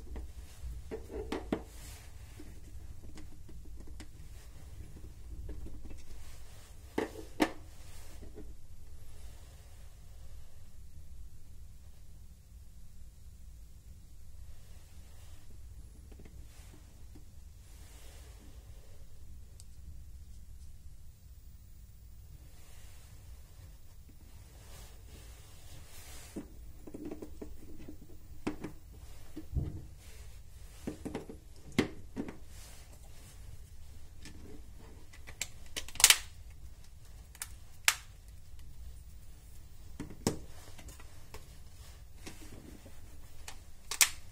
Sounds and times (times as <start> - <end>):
Inside, small room: 0.0 - 44.3.